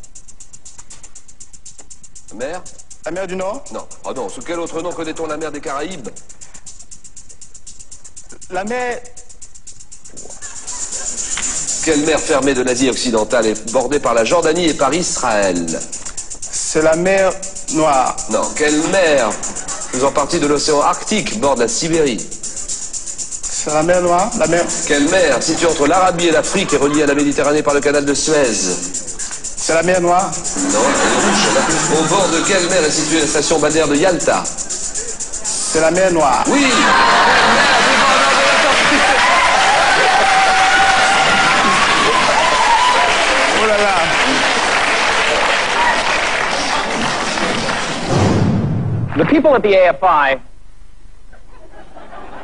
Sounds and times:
Music: 0.0 - 48.6.

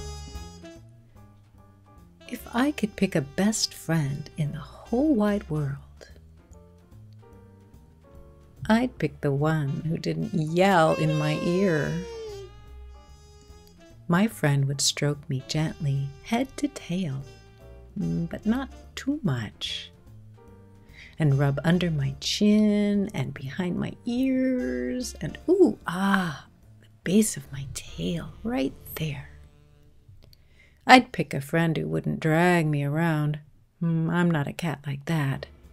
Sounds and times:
Speech: 2.3 - 6.1, 8.6 - 12.1, 14.1 - 17.2, 18.0 - 19.9, 21.2 - 29.4, 30.9 - 35.5.

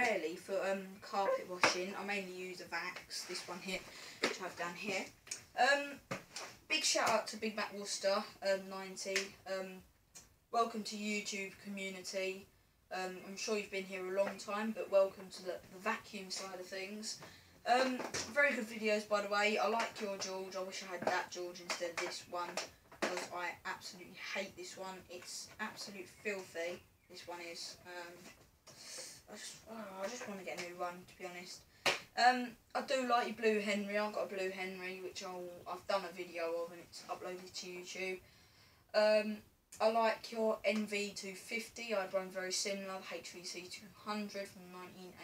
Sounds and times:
Speech: 0.0 - 6.0, 6.7 - 9.9, 10.6 - 28.3, 28.9 - 31.6, 32.2 - 38.2, 39.0 - 45.2.

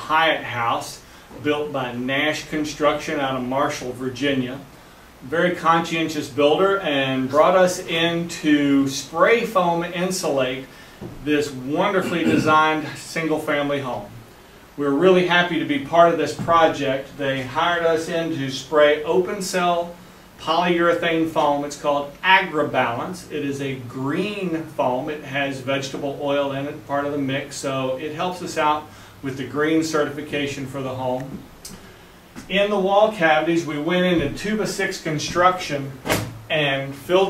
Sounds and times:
Speech: 0.0 - 14.2, 14.8 - 31.5, 32.4 - 37.3.

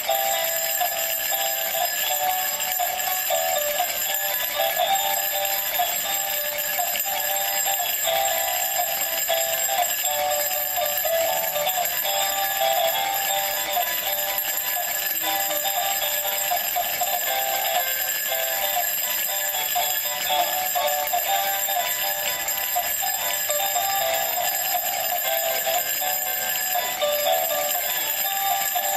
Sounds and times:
Jingle bell: 0.0 - 28.9.

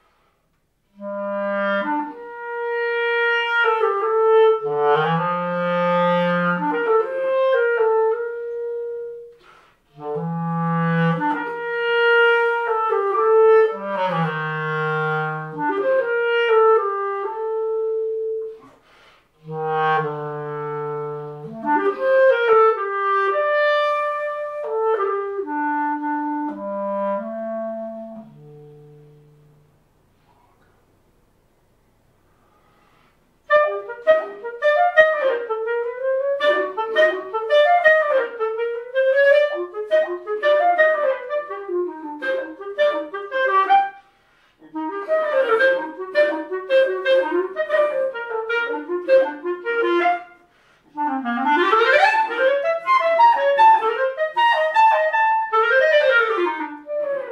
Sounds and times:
Clarinet: 0.0 - 30.8, 32.4 - 57.3.

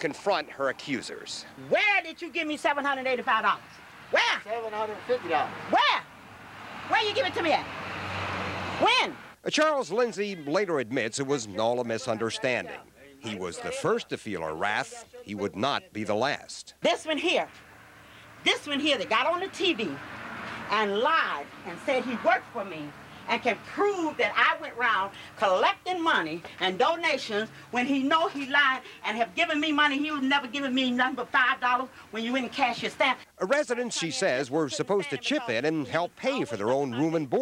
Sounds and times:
Speech: 8.8 - 17.5, 20.7 - 37.4.

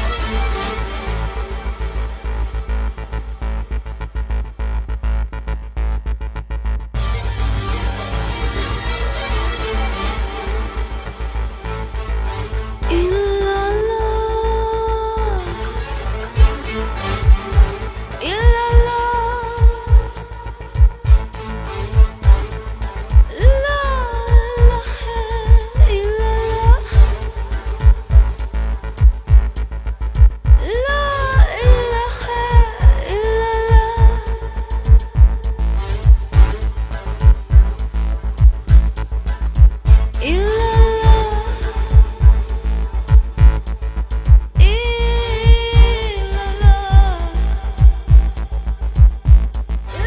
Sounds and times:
Music: 0.0 - 50.0.

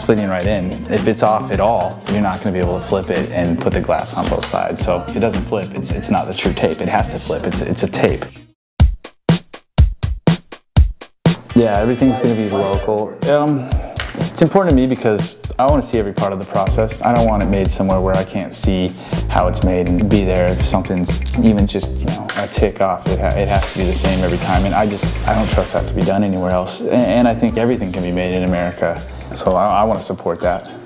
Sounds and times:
Speech: 0.0 - 8.3, 11.6 - 13.7, 14.4 - 30.8
Drum machine: 8.8 - 11.8, 23.1 - 26.2.

